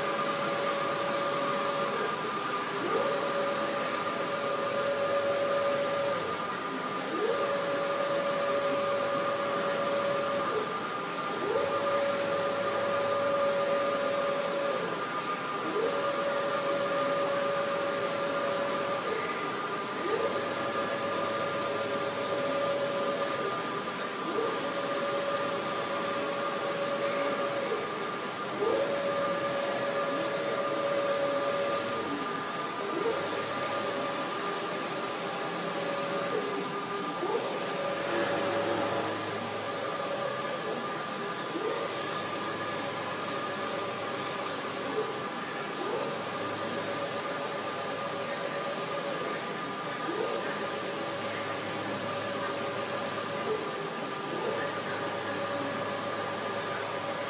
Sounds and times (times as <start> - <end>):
Printer: 0.0 - 57.3.